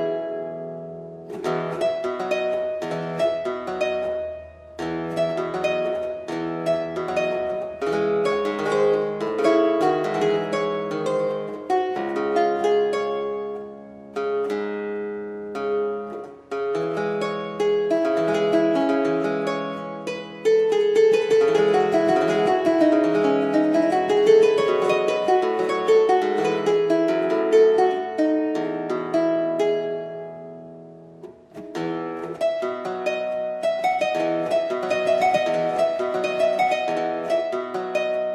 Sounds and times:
Harp: 0.0s - 38.3s.

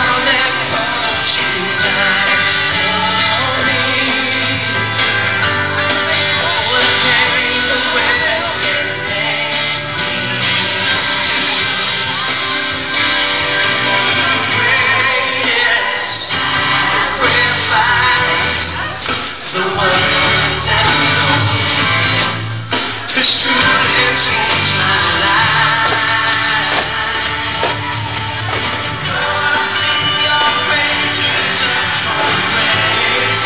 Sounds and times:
Musical instrument: 0.0s - 33.4s.

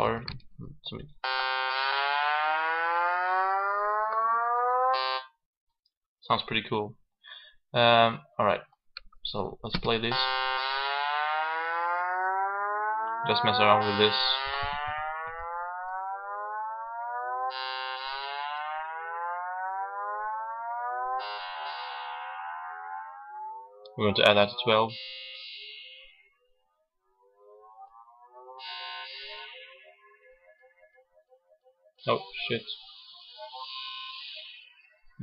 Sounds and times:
Electronic music: 1.2s - 5.3s, 10.1s - 35.2s.

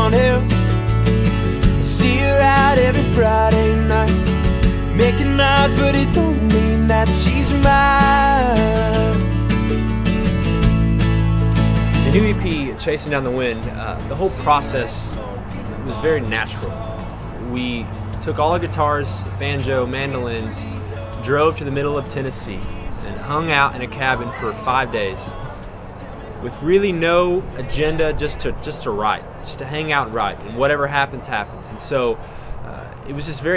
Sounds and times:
Music: 0.0s - 28.5s
Speech: 12.0s - 16.7s, 17.4s - 25.4s, 26.4s - 33.5s.

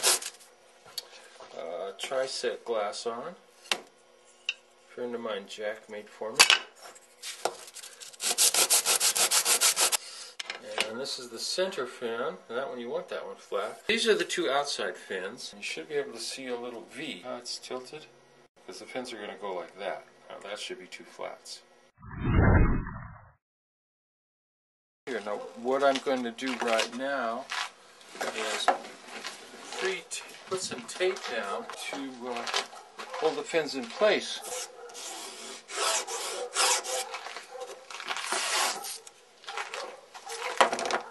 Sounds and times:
Speech: 1.5s - 3.4s, 4.9s - 6.4s, 10.6s - 21.7s, 25.1s - 27.5s, 28.2s - 28.9s, 29.7s - 32.6s, 33.2s - 34.5s.

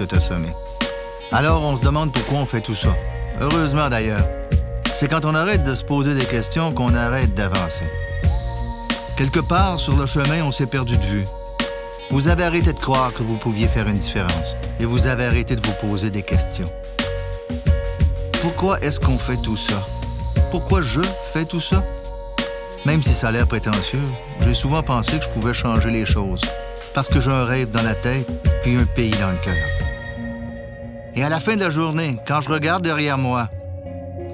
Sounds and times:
Speech: 0.0s - 0.6s, 1.3s - 8.0s, 9.2s - 11.3s, 12.1s - 16.8s, 18.4s - 21.9s, 22.8s - 29.8s, 31.2s - 33.5s
Music: 0.0s - 34.3s.

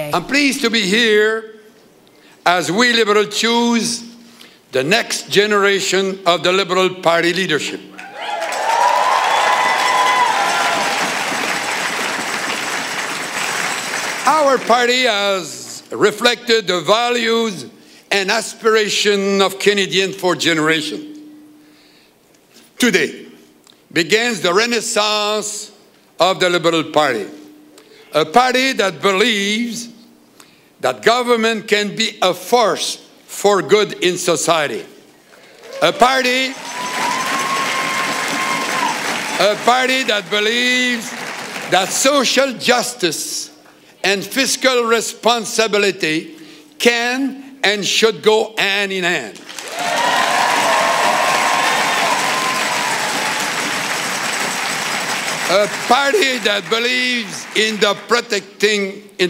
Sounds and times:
Narration, monologue: 0.0s - 8.0s, 14.1s - 36.7s, 39.4s - 49.6s, 55.3s - 59.2s
Male speech, man speaking: 0.1s - 1.5s, 2.4s - 4.1s, 4.8s - 7.8s, 14.3s - 21.1s, 22.8s - 23.3s, 24.0s - 27.4s, 28.2s - 29.9s, 30.8s - 34.9s, 35.8s - 36.6s, 39.4s - 41.1s, 41.7s - 49.4s, 55.5s - 59.2s.

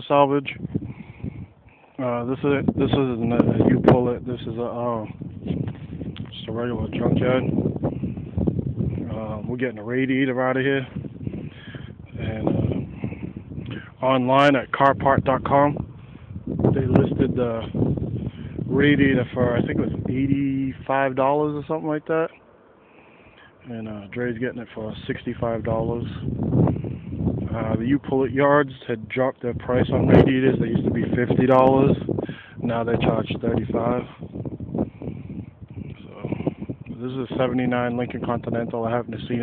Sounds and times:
Speech: 0.0s - 0.6s, 2.0s - 5.2s, 6.3s - 7.5s, 9.0s - 11.0s, 12.2s - 12.7s, 13.8s - 15.8s, 16.7s - 17.8s, 18.7s - 22.4s, 23.6s - 26.3s, 27.5s - 34.2s, 36.0s - 39.4s.

